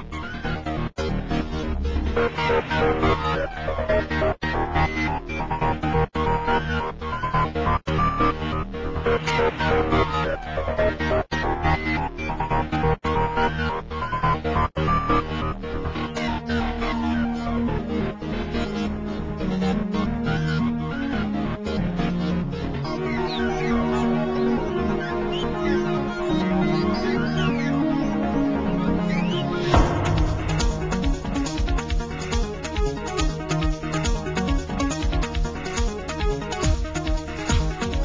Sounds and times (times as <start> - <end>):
Music: 0.0 - 38.0.